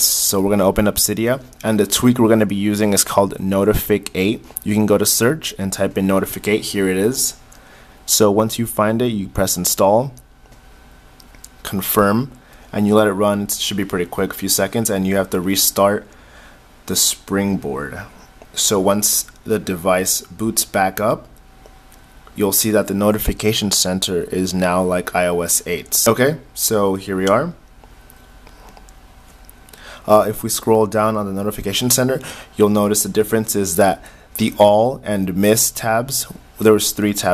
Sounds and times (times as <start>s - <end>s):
Speech: 0.0s - 7.4s, 8.1s - 10.2s, 11.6s - 16.1s, 16.9s - 21.3s, 22.4s - 27.6s, 30.1s - 37.3s.